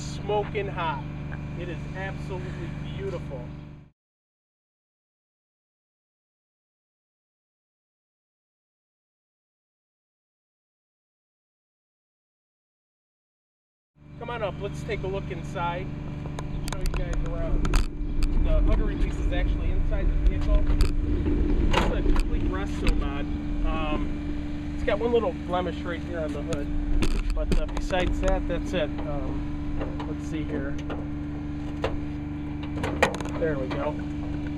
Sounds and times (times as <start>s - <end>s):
Speech: 0.0s - 3.5s, 14.2s - 15.9s, 16.6s - 17.6s, 18.4s - 20.8s, 21.8s - 24.1s, 24.8s - 29.4s, 30.0s - 30.8s, 33.3s - 34.0s.